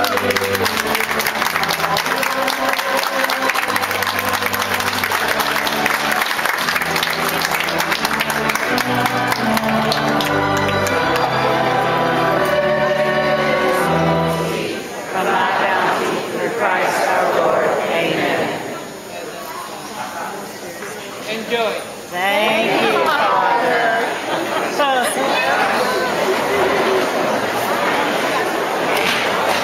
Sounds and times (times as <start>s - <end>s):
Chatter: 0.0s - 29.6s
Inside, public space: 0.0s - 29.6s
Speech: 15.2s - 27.7s.